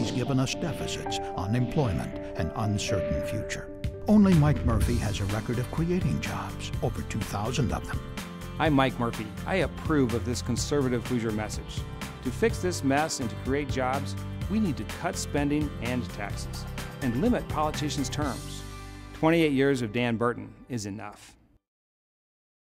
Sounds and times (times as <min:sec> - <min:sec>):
Speech: 0:00.0 - 0:08.0, 0:08.6 - 0:18.6, 0:19.2 - 0:21.4
Music: 0:00.0 - 0:21.7.